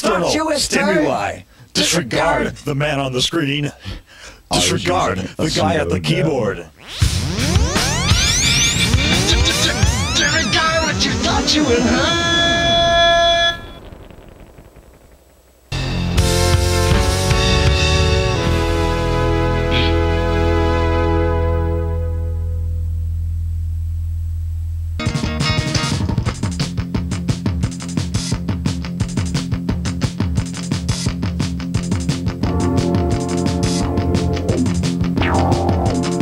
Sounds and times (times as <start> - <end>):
Music: 6.8 - 13.1, 15.8 - 23.7, 24.8 - 36.2.